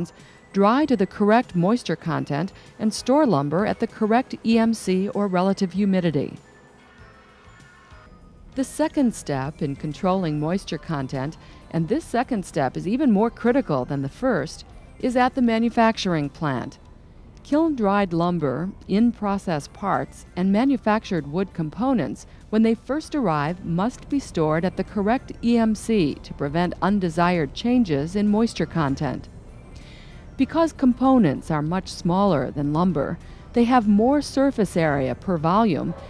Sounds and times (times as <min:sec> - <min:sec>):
Speech: 0:00.0 - 0:06.4, 0:08.6 - 0:16.8, 0:17.5 - 0:29.3, 0:30.4 - 0:36.0.